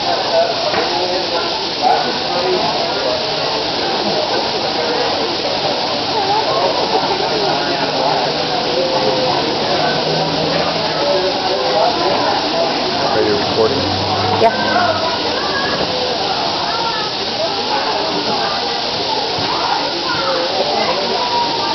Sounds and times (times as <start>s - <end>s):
Hiss: 0.0s - 21.7s.